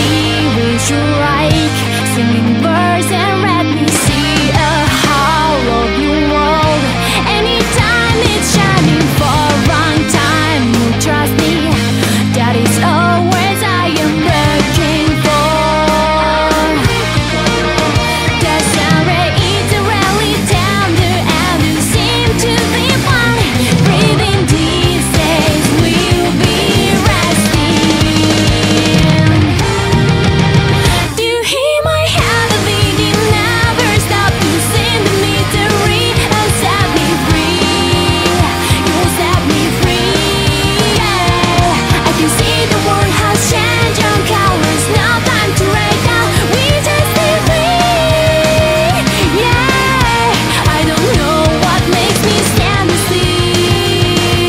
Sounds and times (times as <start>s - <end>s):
Music: 0.0s - 54.4s.